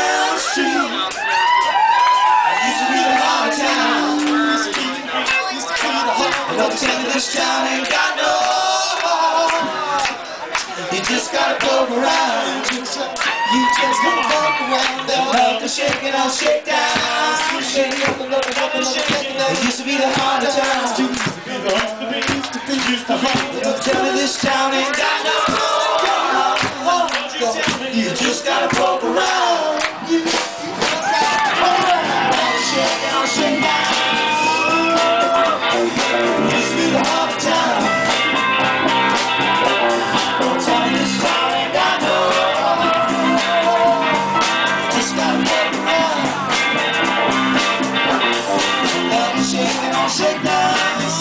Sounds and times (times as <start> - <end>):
Music: 0.0 - 51.2.